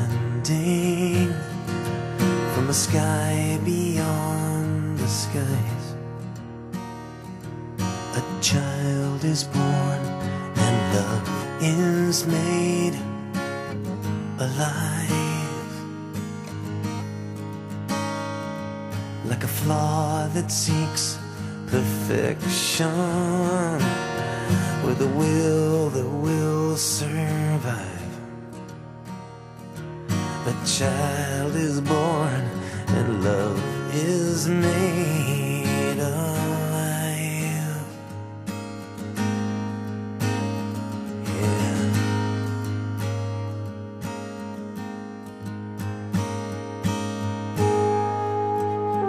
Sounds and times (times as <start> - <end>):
Music: 0.0 - 49.0.